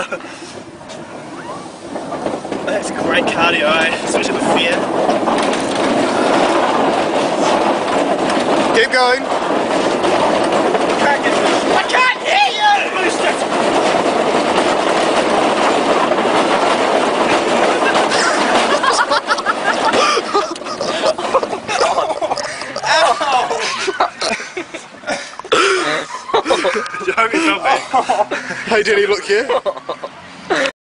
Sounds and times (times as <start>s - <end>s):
Speech: 11.0s - 13.4s, 28.7s - 29.6s.